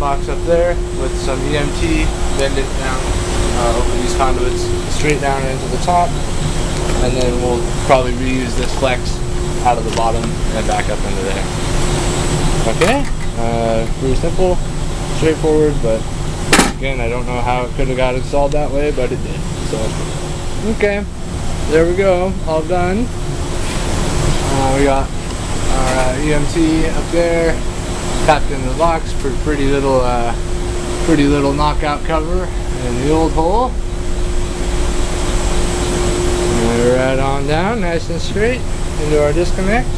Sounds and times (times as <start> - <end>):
Speech: 0.0 - 6.2, 7.0 - 11.5, 12.6 - 16.0, 16.8 - 20.0, 20.6 - 21.1, 21.7 - 23.1, 24.5 - 25.1, 25.7 - 27.6, 28.3 - 30.4, 31.0 - 33.8, 36.5 - 39.9.